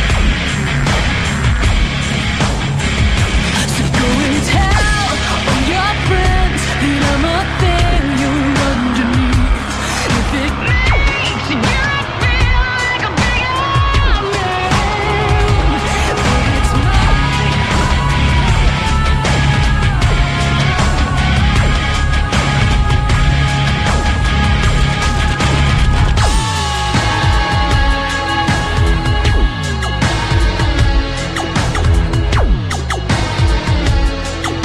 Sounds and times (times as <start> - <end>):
Music: 0.0 - 34.6.